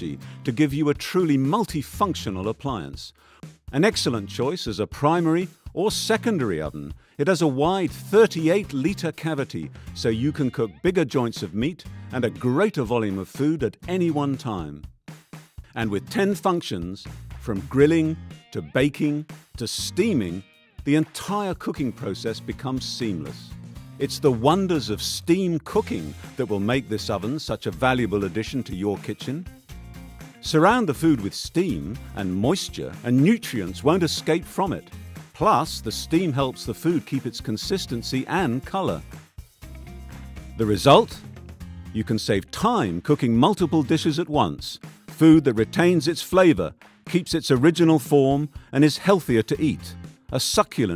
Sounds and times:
Speech: 0.0 - 14.8, 15.8 - 29.5, 30.4 - 39.1, 40.6 - 41.3, 42.0 - 50.9
Music: 0.0 - 50.9.

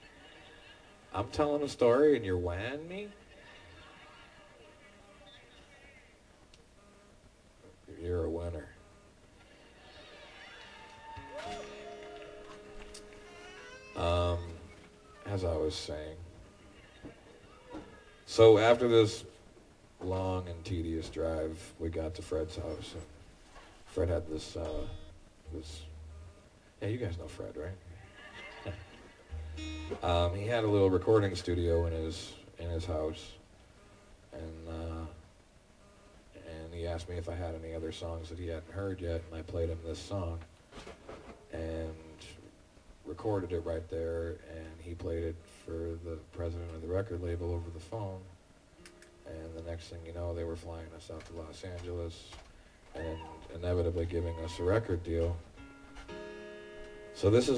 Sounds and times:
Speech: 1.1 - 3.2, 7.9 - 8.8, 14.0 - 16.3, 18.3 - 19.4, 20.0 - 23.1, 23.9 - 25.9, 26.8 - 27.8, 30.0 - 33.4, 34.3 - 35.2, 36.4 - 40.5, 41.5 - 48.3, 49.2 - 52.4, 53.0 - 55.5, 57.2 - 57.5.

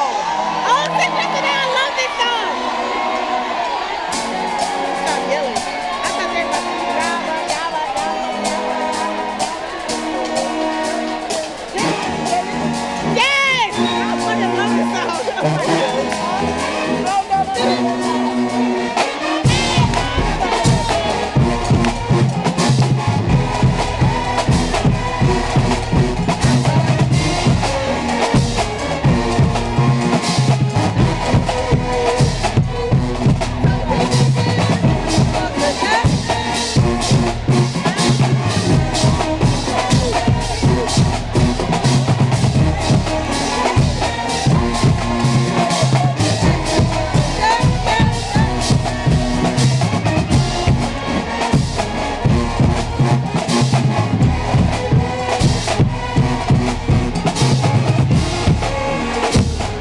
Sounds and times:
Music: 0.0 - 59.8.

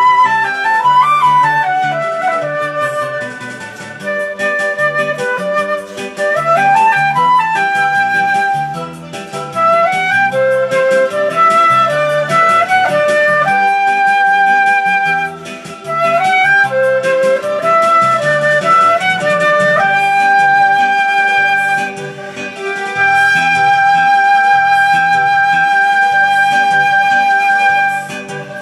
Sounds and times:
Wind instrument, woodwind instrument: 0.0 - 28.6.

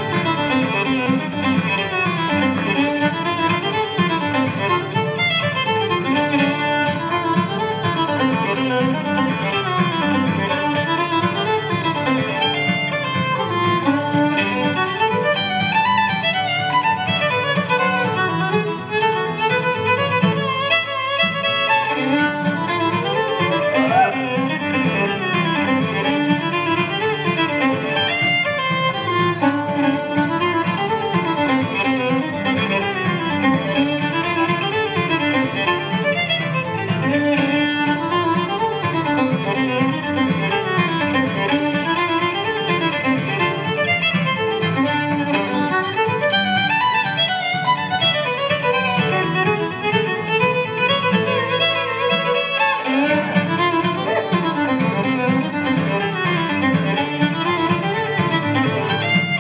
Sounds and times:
Violin, fiddle: 0.0 - 59.4.

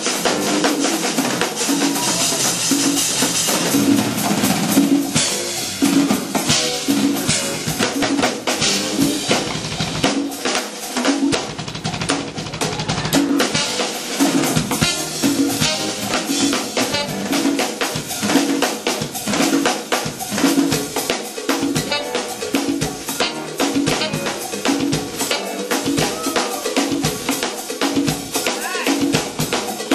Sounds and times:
Bass drum: 0.0 - 10.4, 11.2 - 29.8
Drum kit: 0.0 - 29.9
Drum roll: 0.0 - 29.9.

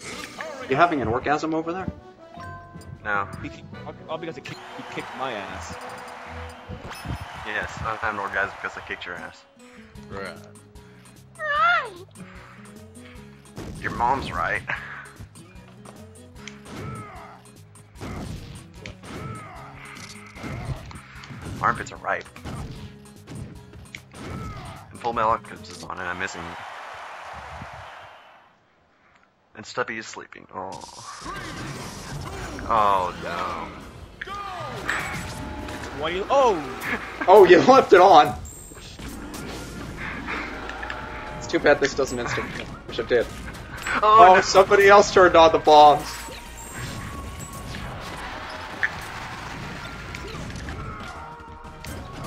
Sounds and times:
Music: 0.0 - 28.0, 31.2 - 52.2.

